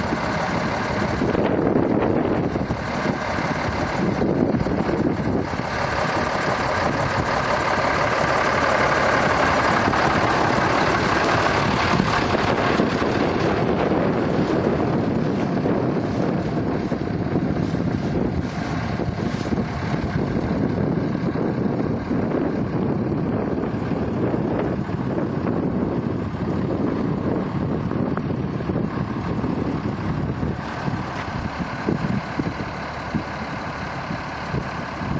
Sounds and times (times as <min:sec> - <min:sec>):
Vehicle: 0:00.0 - 0:35.1.